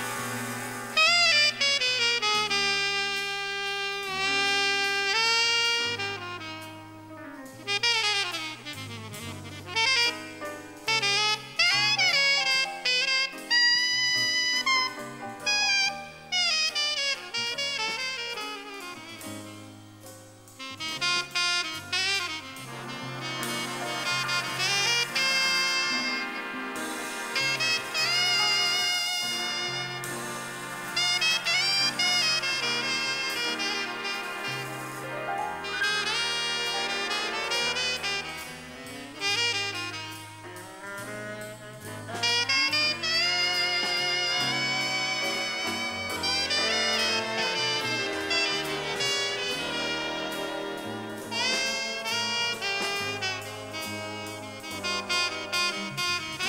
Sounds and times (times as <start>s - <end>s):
Musical instrument: 4.0s - 56.4s.